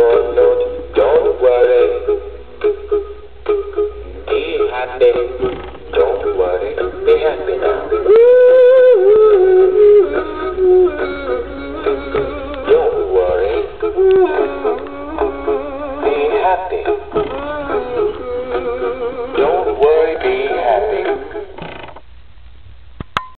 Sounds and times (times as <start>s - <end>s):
Male singing: 0.0s - 2.2s, 4.2s - 21.6s
Music: 0.0s - 21.8s.